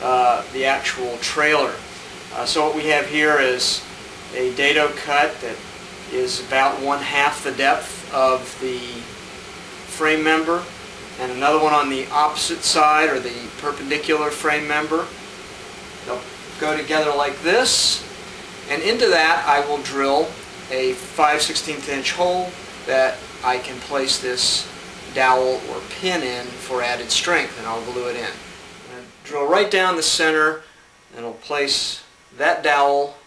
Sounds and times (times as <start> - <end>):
Speech: 0.0 - 9.1, 9.9 - 15.1, 16.1 - 18.1, 18.7 - 30.6, 31.2 - 33.2.